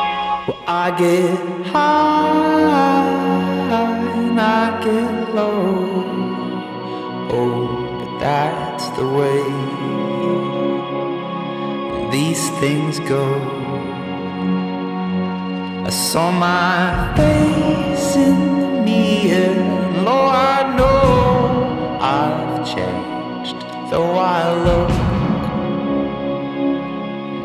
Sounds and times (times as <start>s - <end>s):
Music: 0.0s - 27.4s.